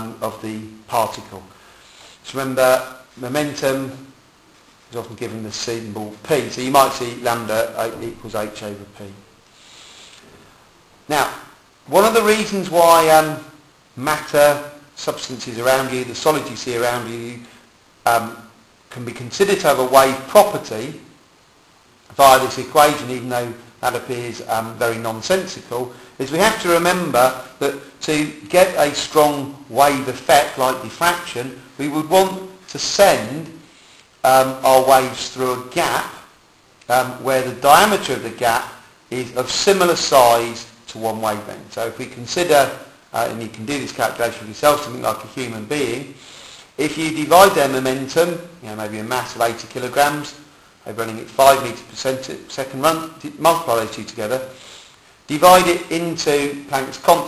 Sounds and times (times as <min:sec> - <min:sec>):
Speech: 0:00.0 - 0:01.6, 0:02.2 - 0:04.2, 0:04.9 - 0:09.3, 0:11.1 - 0:21.2, 0:22.1 - 0:36.3, 0:36.9 - 0:46.2, 0:46.8 - 0:54.6, 0:55.3 - 0:57.2.